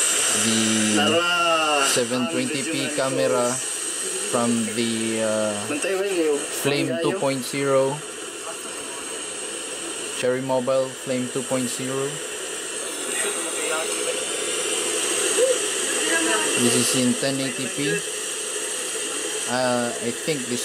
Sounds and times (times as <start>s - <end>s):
Television: 0.0s - 20.6s
Speech: 0.4s - 3.6s, 4.4s - 8.0s, 10.2s - 12.2s, 16.2s - 18.0s, 19.5s - 20.6s.